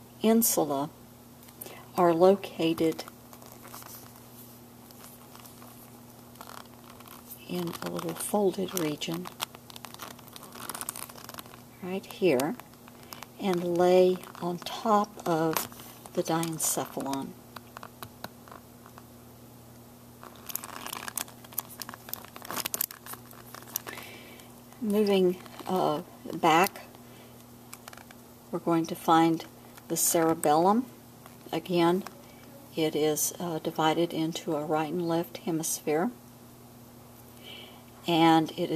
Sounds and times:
Inside, small room: 0:00.0 - 0:38.7
Speech: 0:00.2 - 0:00.9, 0:02.0 - 0:03.1, 0:07.4 - 0:09.3, 0:11.8 - 0:12.6, 0:13.4 - 0:15.6, 0:16.2 - 0:17.3, 0:24.8 - 0:26.9, 0:28.6 - 0:30.9, 0:31.5 - 0:32.1, 0:32.7 - 0:36.2, 0:38.1 - 0:38.7
Crumpling, crinkling: 0:02.5 - 0:19.1, 0:20.2 - 0:28.2, 0:29.5 - 0:32.5.

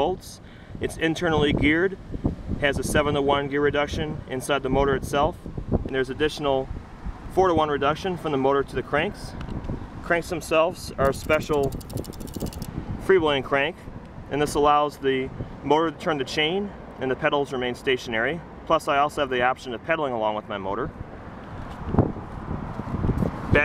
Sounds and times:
Speech: 0:00.0 - 0:02.0, 0:02.6 - 0:06.7, 0:07.3 - 0:09.4, 0:10.0 - 0:11.8, 0:13.0 - 0:20.9.

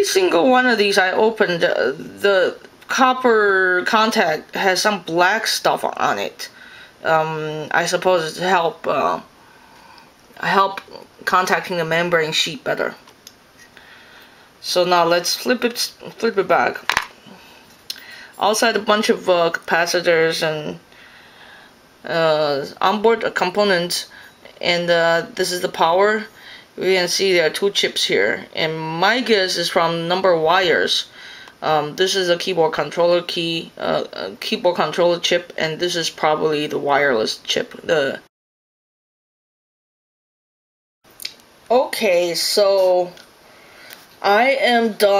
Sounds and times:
Speech: 0:00.0 - 0:09.3, 0:10.4 - 0:13.0, 0:14.6 - 0:16.9, 0:17.9 - 0:20.8, 0:22.0 - 0:38.3, 0:41.7 - 0:43.3, 0:44.2 - 0:45.2.

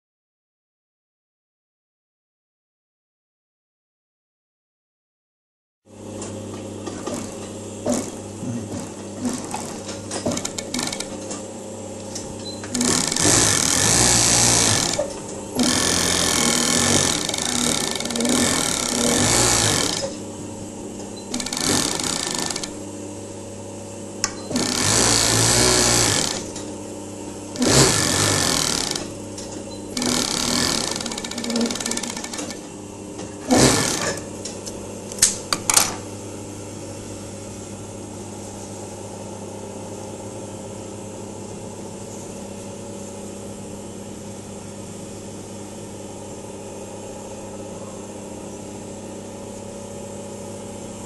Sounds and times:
Sewing machine: 0:07.9 - 0:11.3, 0:12.6 - 0:20.2, 0:21.3 - 0:22.8, 0:24.4 - 0:26.6, 0:27.6 - 0:29.2, 0:29.9 - 0:32.7, 0:33.4 - 0:34.3.

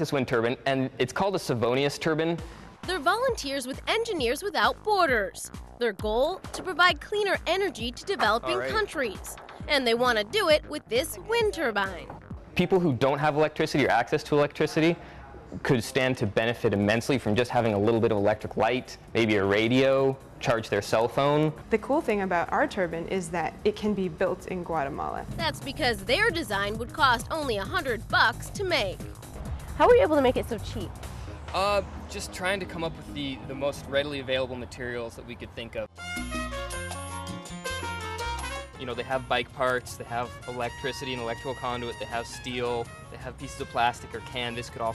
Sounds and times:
Music: 0:00.0 - 0:44.9.

